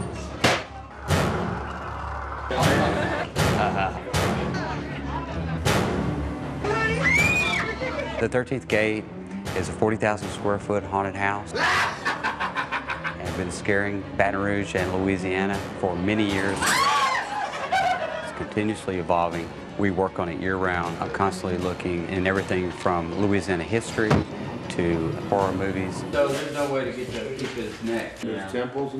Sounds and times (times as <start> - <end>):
Music: 0.0 - 28.9.